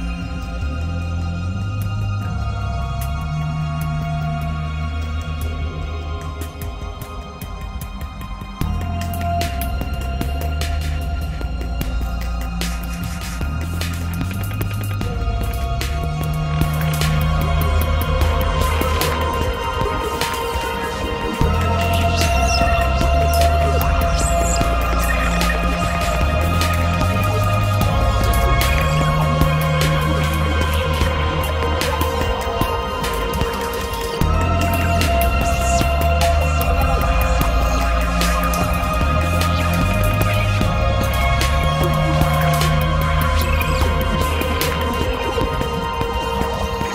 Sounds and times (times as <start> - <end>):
Music: 0.0 - 46.9.